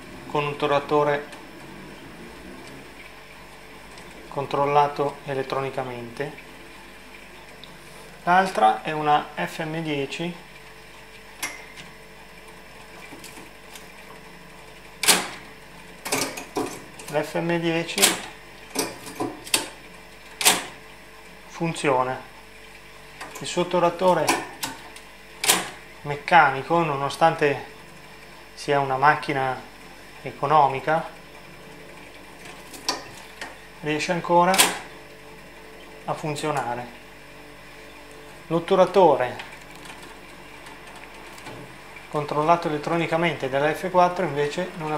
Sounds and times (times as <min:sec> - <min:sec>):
Speech: 0:00.3 - 0:01.4, 0:04.3 - 0:06.4, 0:08.2 - 0:10.4, 0:17.1 - 0:18.2, 0:21.5 - 0:22.3, 0:23.4 - 0:24.5, 0:26.0 - 0:27.7, 0:28.6 - 0:31.2, 0:33.8 - 0:34.8, 0:36.1 - 0:37.0, 0:38.5 - 0:39.5, 0:42.1 - 0:44.9.